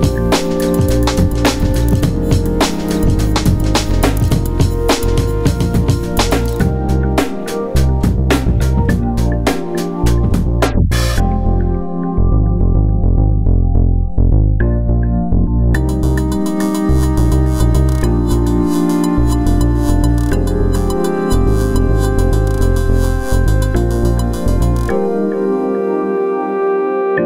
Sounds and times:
Synthesizer: 0:00.0 - 0:27.2.

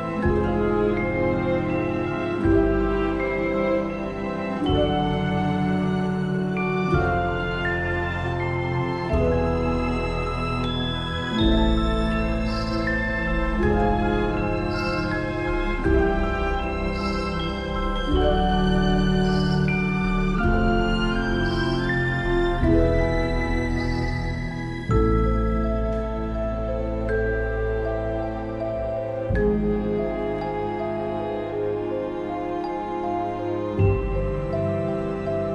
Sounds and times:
Background music: 0:00.0 - 0:35.5
Soundtrack music: 0:00.0 - 0:35.5.

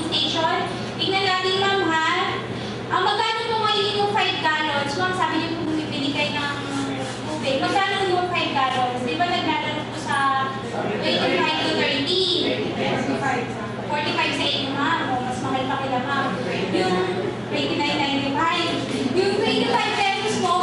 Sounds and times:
Speech: 0:00.0 - 0:20.6.

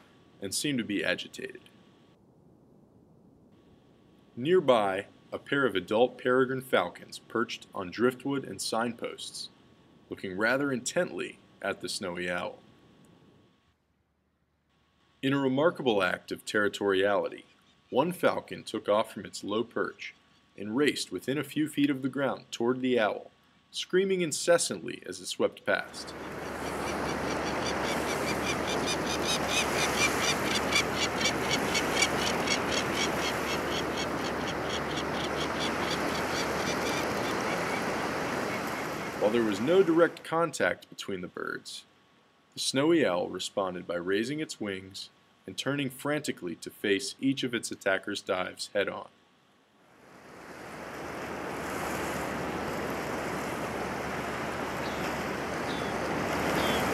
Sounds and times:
Speech: 0:00.4 - 0:01.7, 0:04.4 - 0:09.5, 0:10.1 - 0:12.6, 0:15.2 - 0:26.1, 0:39.2 - 0:41.9, 0:42.6 - 0:49.1.

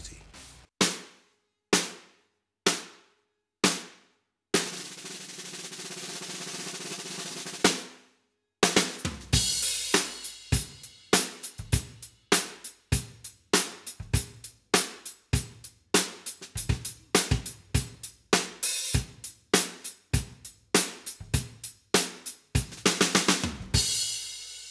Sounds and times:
Drum kit: 0:00.0 - 0:01.2, 0:02.7 - 0:03.0, 0:03.6 - 0:04.0, 0:04.6 - 0:07.9, 0:08.6 - 0:24.7
Drum roll: 0:04.6 - 0:07.9, 0:08.6 - 0:24.7.

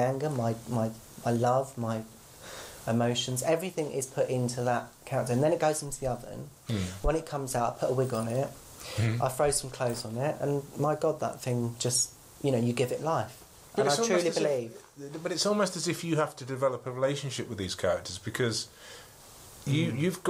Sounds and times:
Speech: 0:00.0 - 0:02.1, 0:02.9 - 0:18.7, 0:19.7 - 0:20.2.

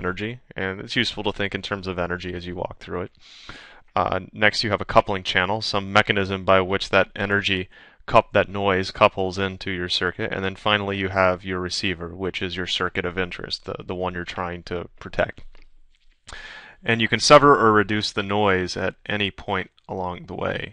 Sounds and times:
Speech: 0:00.0 - 0:03.1, 0:04.0 - 0:15.5, 0:16.4 - 0:20.7.

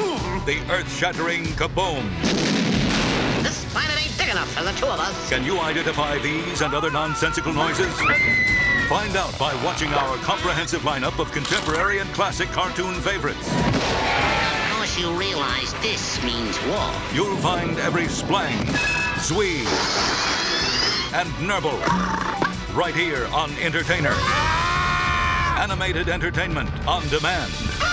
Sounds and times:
Music: 0:00.0 - 0:27.9
Speech: 0:22.8 - 0:24.2, 0:25.6 - 0:27.5.

